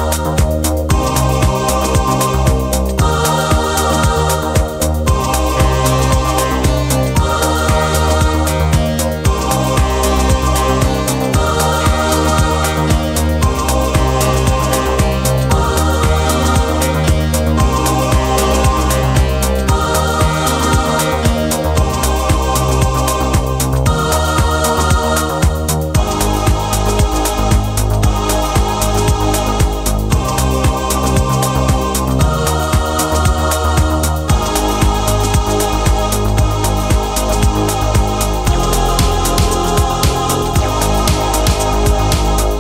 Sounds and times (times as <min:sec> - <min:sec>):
Music: 0:00.0 - 0:42.6.